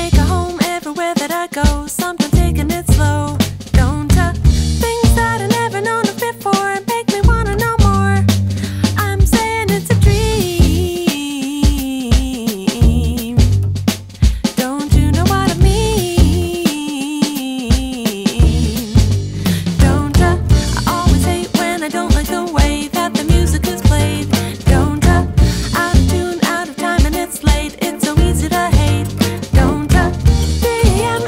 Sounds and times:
Music: 0.0 - 31.2.

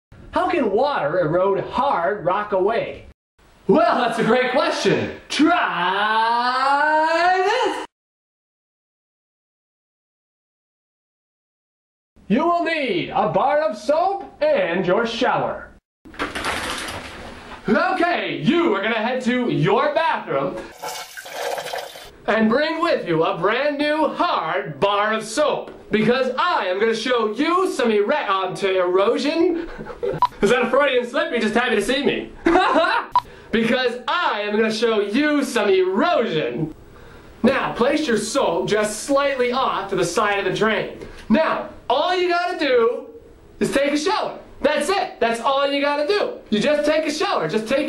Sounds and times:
Inside, small room: 0.2 - 8.0, 12.2 - 47.8
Speech: 0.3 - 3.1, 3.7 - 7.9, 12.3 - 15.8, 17.7 - 20.6, 22.3 - 29.7, 30.4 - 36.8, 37.4 - 47.8
Toilet flush: 20.7 - 22.2.

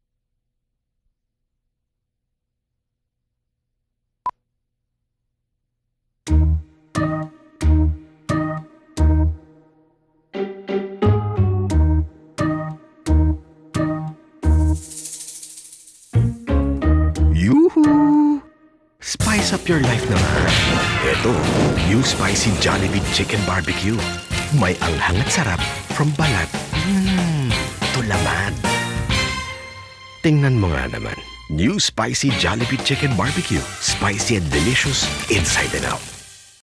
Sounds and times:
Music: 6.2 - 36.6
Speech: 17.3 - 18.4, 19.0 - 28.6, 30.2 - 36.1.

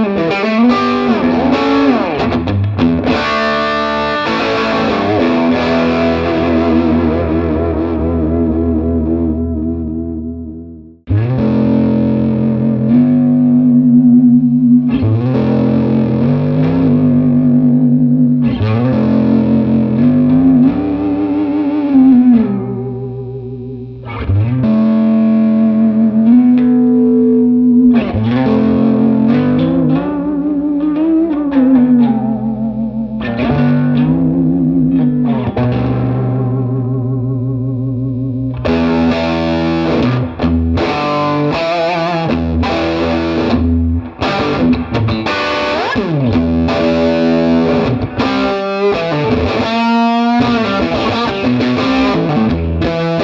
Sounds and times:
Electric guitar: 0.0 - 53.2.

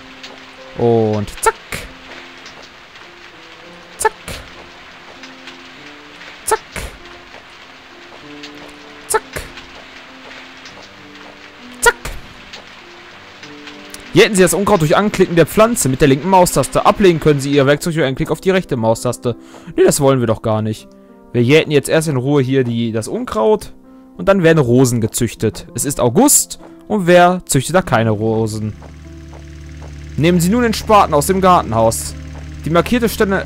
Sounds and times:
Music: 0.0 - 33.4
Speech: 0.8 - 1.9, 4.0 - 4.4, 6.5 - 6.9, 9.1 - 9.5, 11.8 - 12.1, 14.1 - 28.8, 30.2 - 33.4.

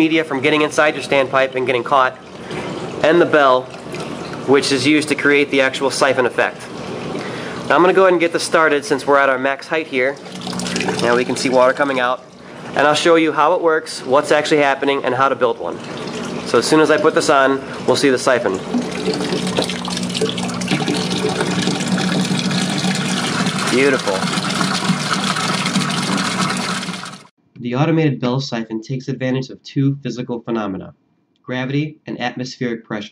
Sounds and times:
Speech: 0.0 - 2.2, 3.0 - 3.7, 4.5 - 6.7, 7.7 - 10.2, 11.0 - 12.2, 12.8 - 15.8, 16.5 - 18.6, 23.7 - 24.2, 27.6 - 30.9, 31.5 - 33.1.

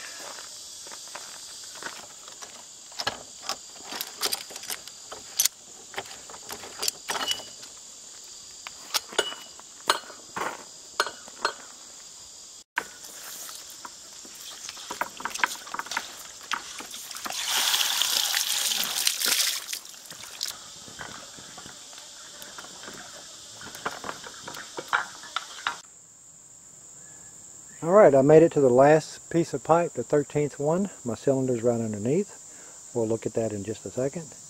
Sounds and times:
Water: 16.8 - 20.6
Speech: 27.8 - 34.4.

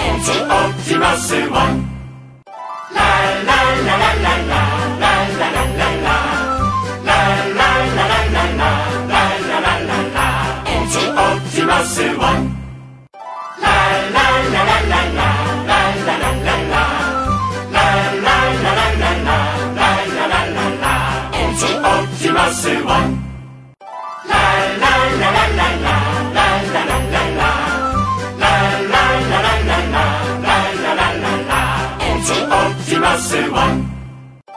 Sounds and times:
Music: 0.0 - 34.5.

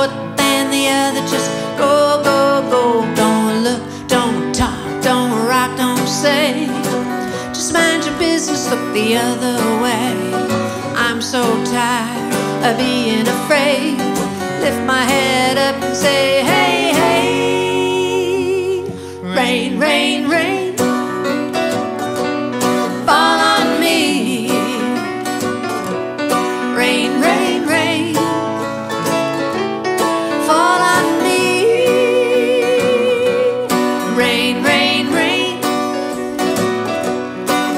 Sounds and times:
Music: 0.0 - 37.7.

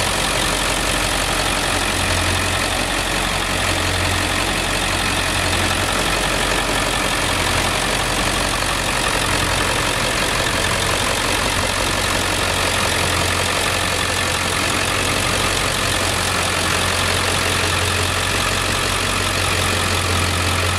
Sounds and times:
Vehicle: 0.0 - 20.7.

